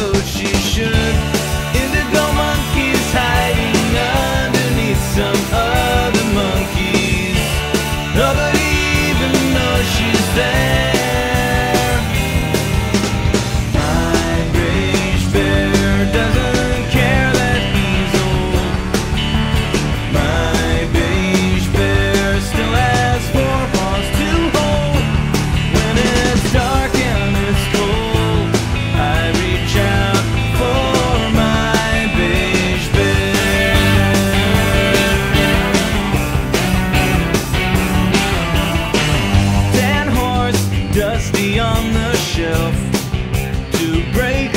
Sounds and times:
Angry music: 0.0 - 44.5.

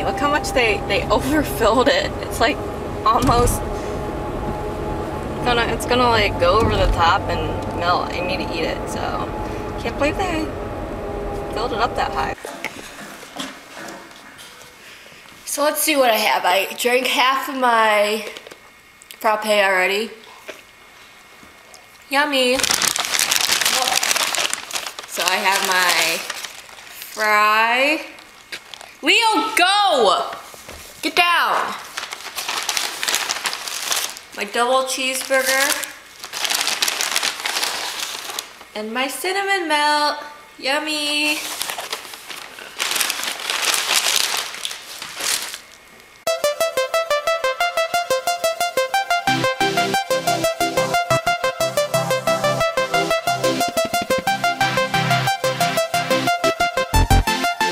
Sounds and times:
Speech: 0.0 - 3.6, 5.4 - 10.5, 11.5 - 12.7, 15.5 - 18.4, 19.2 - 20.2, 22.1 - 22.6, 23.7 - 24.0, 25.1 - 26.3, 27.2 - 28.2, 29.0 - 30.4, 31.0 - 31.8, 34.4 - 36.0, 38.8 - 41.4.

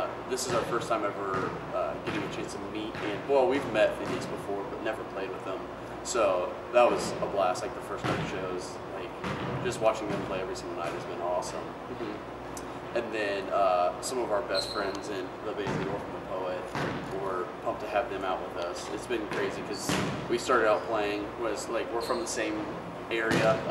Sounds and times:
Speech: 0.0 - 12.2, 13.0 - 23.7.

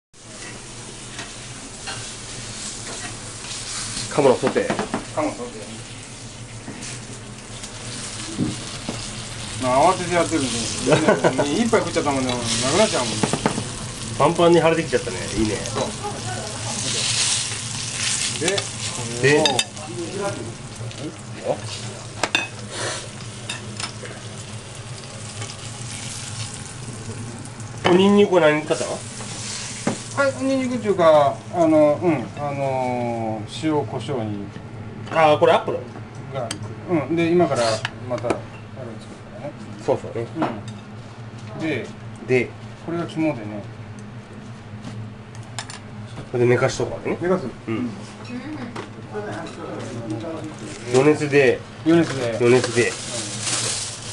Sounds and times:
Sizzle: 0.2 - 32.9, 50.2 - 54.1
Frying (food): 0.2 - 33.8, 49.1 - 54.1.

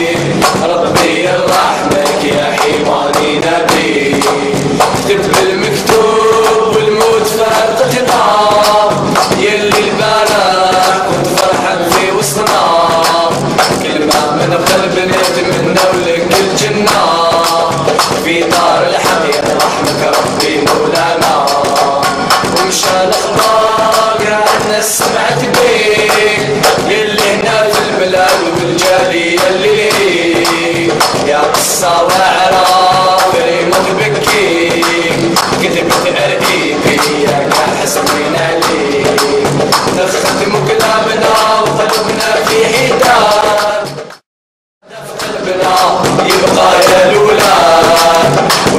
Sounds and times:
Music: 0.0 - 44.2, 44.8 - 48.7.

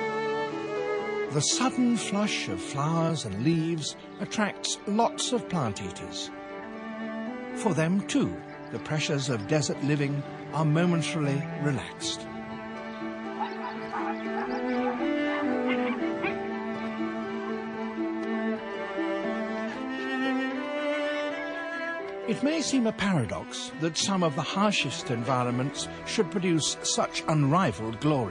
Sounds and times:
Violin, fiddle: 0.0 - 28.3.

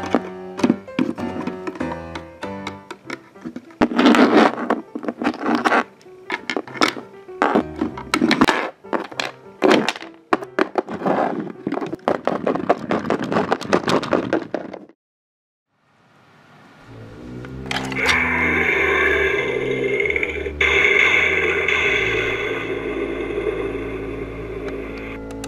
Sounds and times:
Music: 0.0 - 13.4, 16.9 - 25.4.

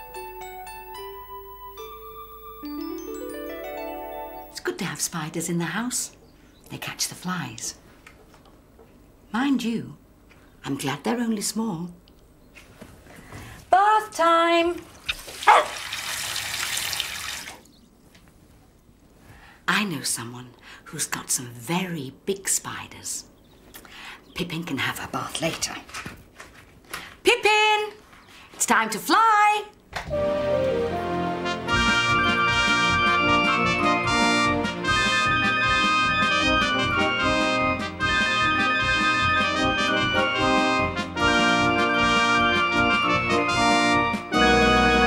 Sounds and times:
Speech: 4.6 - 7.8, 9.3 - 10.0, 10.6 - 12.0, 13.7 - 14.8, 19.7 - 23.3, 24.4 - 26.0, 27.2 - 28.0, 28.6 - 29.8
Liquid: 14.8 - 17.8.

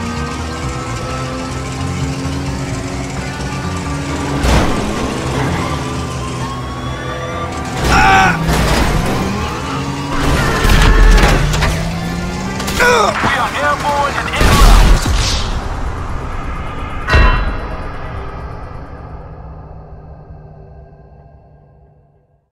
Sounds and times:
Speech: 12.8 - 14.8.

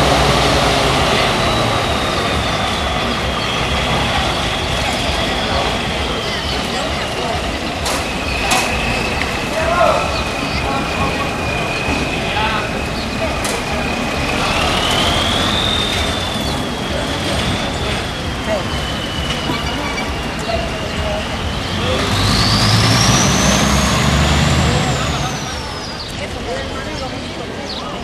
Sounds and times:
Truck: 0.0 - 28.0
Speech: 0.2 - 28.0.

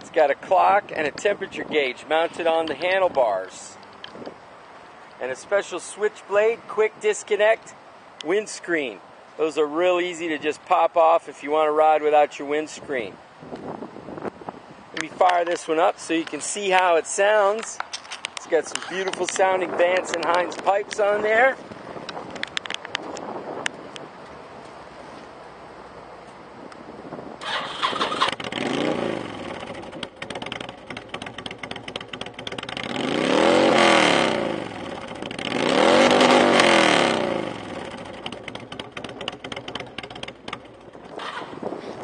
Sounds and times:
Speech: 0.0 - 3.8, 5.2 - 13.2, 15.0 - 17.8, 18.4 - 21.6
Outside, urban or manmade: 0.0 - 42.0
Vehicle: 0.0 - 42.0.

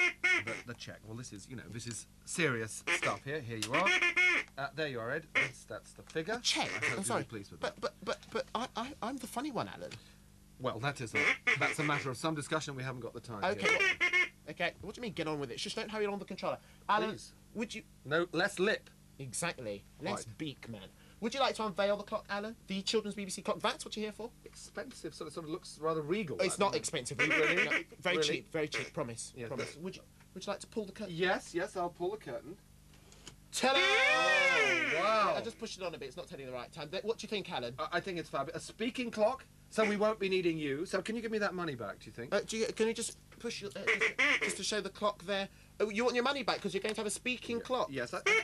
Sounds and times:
Speech: 0.4 - 4.0, 4.6 - 10.0, 10.6 - 13.9, 14.5 - 32.6, 33.5 - 48.3.

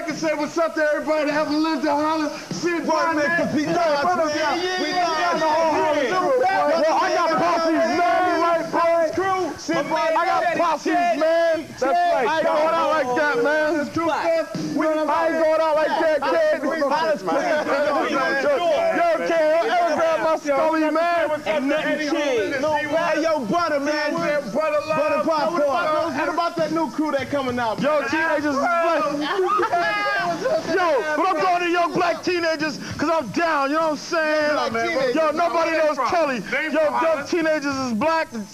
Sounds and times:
Speech: 0.0 - 38.5.

